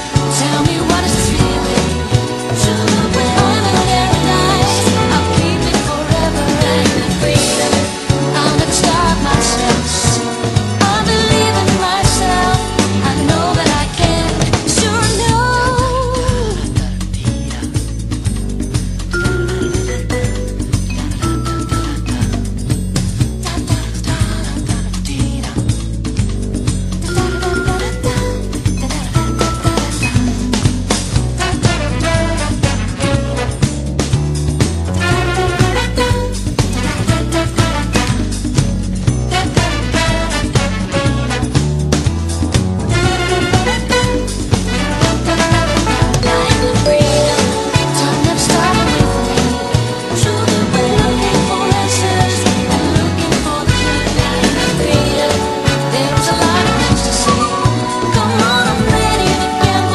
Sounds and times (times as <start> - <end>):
Theme music: 0.0 - 15.8, 17.9 - 23.6, 26.6 - 59.9.